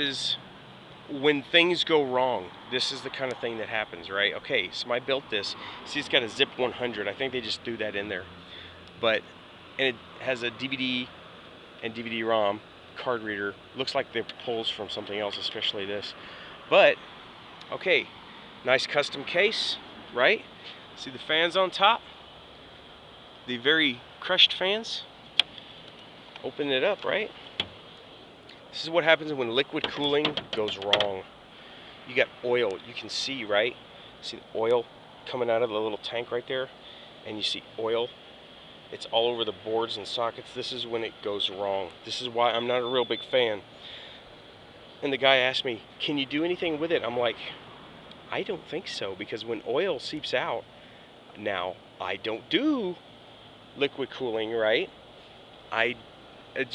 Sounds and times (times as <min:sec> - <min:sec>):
Speech: 0:00.0 - 0:00.4, 0:01.1 - 0:08.3, 0:09.0 - 0:09.2, 0:09.8 - 0:11.1, 0:11.8 - 0:17.0, 0:17.7 - 0:22.1, 0:23.5 - 0:25.1, 0:26.4 - 0:27.4, 0:28.7 - 0:31.3, 0:32.1 - 0:38.1, 0:38.9 - 0:43.7, 0:45.0 - 0:47.6, 0:48.3 - 0:50.6, 0:51.4 - 0:53.0, 0:53.8 - 0:54.9, 0:55.7 - 0:56.0.